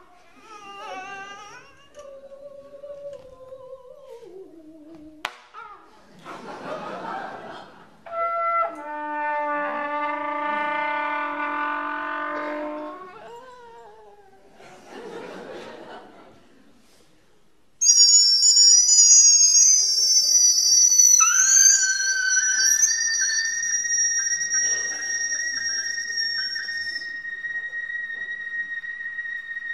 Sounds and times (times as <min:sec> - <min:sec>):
Music: 0:08.1 - 0:13.2, 0:17.9 - 0:29.7.